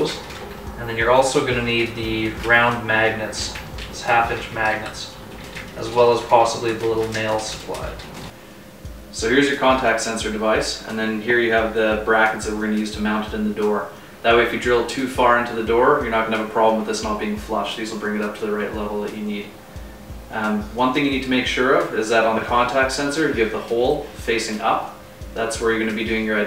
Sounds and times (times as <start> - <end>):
Speech: 0.0 - 0.2, 0.8 - 8.0, 9.1 - 19.6, 20.3 - 26.4.